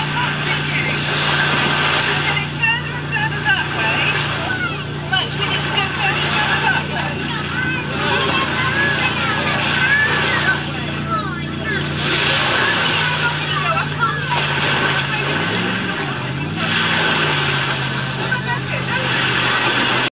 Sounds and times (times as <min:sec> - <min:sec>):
Speech: 0:00.0 - 0:17.2, 0:18.1 - 0:20.1
Rowboat, canoe, kayak: 0:00.0 - 0:20.1.